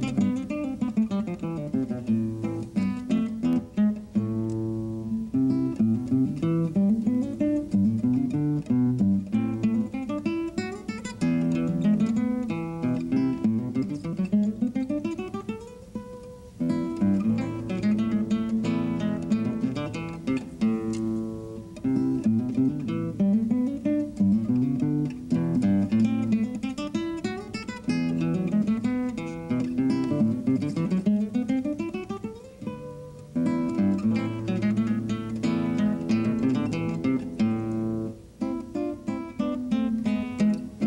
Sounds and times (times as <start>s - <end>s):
Acoustic guitar: 0.0s - 40.8s.